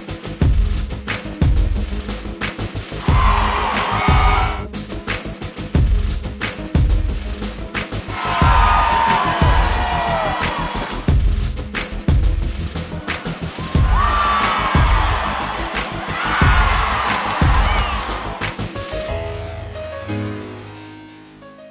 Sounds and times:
Music: 0:00.0 - 0:21.7
Cheering: 0:03.0 - 0:04.6, 0:08.1 - 0:11.1, 0:13.0 - 0:18.7.

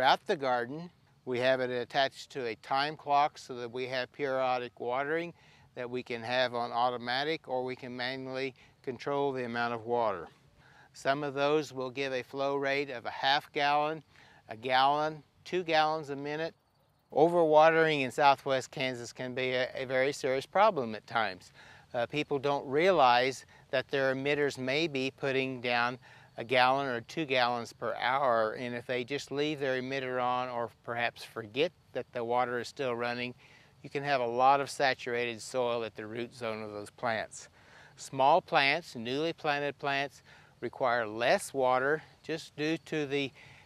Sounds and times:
Speech: 0:00.0 - 0:10.3, 0:11.0 - 0:43.4.

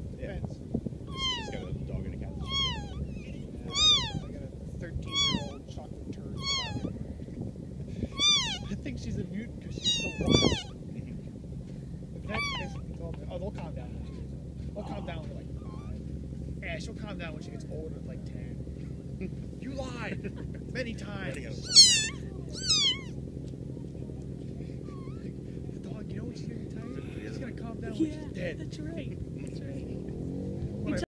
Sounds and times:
Speech: 0:00.2 - 0:00.6, 0:01.3 - 0:02.5, 0:03.1 - 0:07.0, 0:08.6 - 0:11.3, 0:12.2 - 0:16.0, 0:16.6 - 0:18.6, 0:19.2 - 0:22.6, 0:25.6 - 0:30.1, 0:30.8 - 0:31.0
Domestic animals, pets: 0:01.1 - 0:01.8, 0:02.4 - 0:04.4, 0:05.0 - 0:05.8, 0:06.4 - 0:07.0, 0:08.0 - 0:08.9, 0:09.6 - 0:10.8, 0:12.2 - 0:13.0, 0:15.2 - 0:16.1, 0:21.4 - 0:23.2, 0:24.5 - 0:25.5.

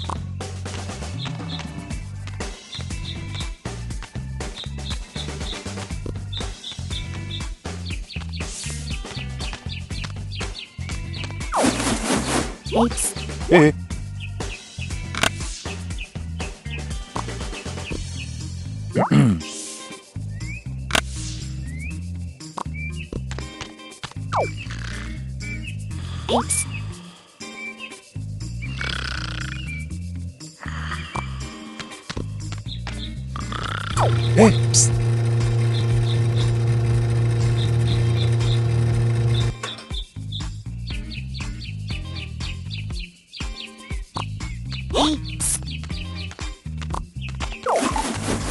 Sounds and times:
Music: 0:00.0 - 0:48.5
Speech: 0:12.7 - 0:13.8, 0:19.0 - 0:19.5, 0:26.3 - 0:26.7, 0:34.3 - 0:34.9, 0:44.9 - 0:45.6.

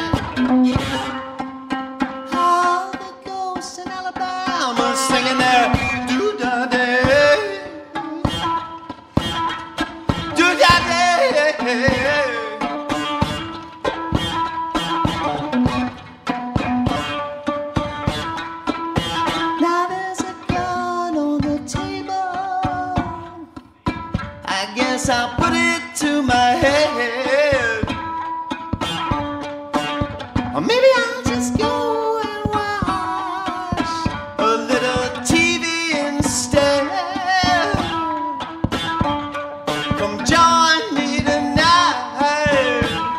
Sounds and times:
Musical instrument: 0:00.0 - 0:43.1
Singing: 0:02.3 - 0:08.6, 0:10.3 - 0:13.0, 0:19.6 - 0:23.5, 0:24.5 - 0:27.9, 0:30.6 - 0:38.4, 0:39.9 - 0:43.1.

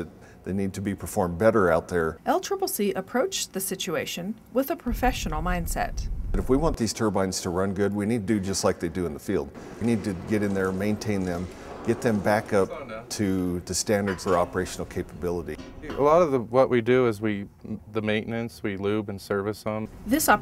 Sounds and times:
Speech: 0:04.6 - 0:20.4.

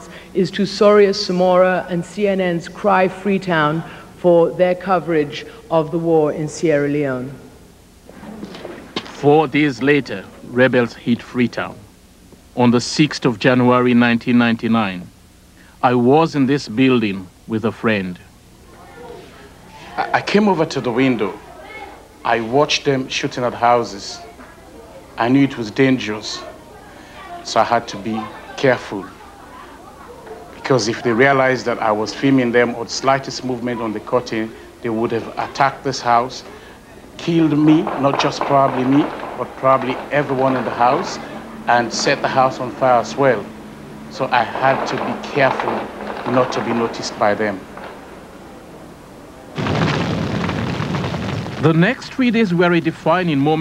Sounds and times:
Male speech, man speaking: 0:00.0 - 0:07.2, 0:09.1 - 0:11.8, 0:12.6 - 0:15.1, 0:15.8 - 0:18.3, 0:19.8 - 0:21.4, 0:22.2 - 0:24.4, 0:25.2 - 0:26.6, 0:27.4 - 0:29.2, 0:30.6 - 0:36.5, 0:37.2 - 0:43.5, 0:44.1 - 0:47.6, 0:51.6 - 0:53.6
Narration, monologue: 0:00.0 - 0:29.2, 0:30.6 - 0:50.5, 0:51.4 - 0:53.6.

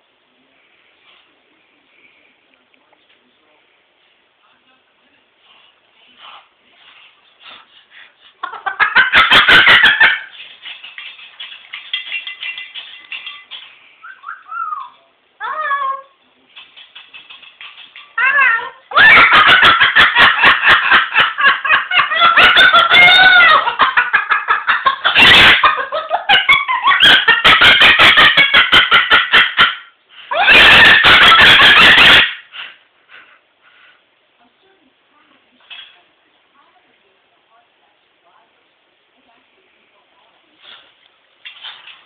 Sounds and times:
Laughter: 0:08.4 - 0:10.3, 0:19.0 - 0:29.8.

